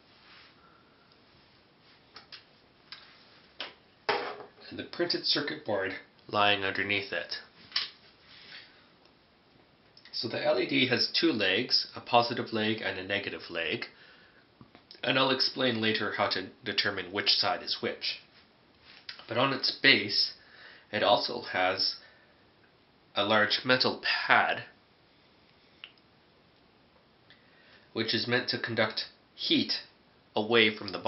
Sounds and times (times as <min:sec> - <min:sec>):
Speech: 0:04.6 - 0:07.5, 0:10.1 - 0:14.0, 0:14.9 - 0:18.3, 0:19.2 - 0:22.0, 0:23.2 - 0:24.8, 0:28.0 - 0:31.0.